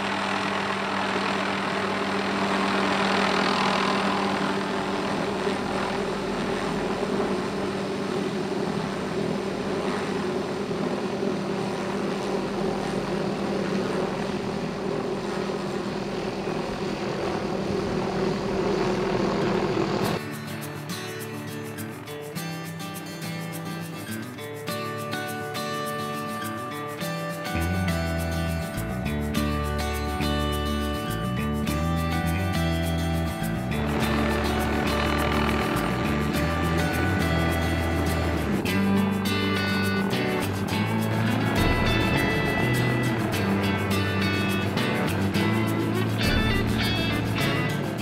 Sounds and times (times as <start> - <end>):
Outside, rural or natural: 0.0 - 48.0.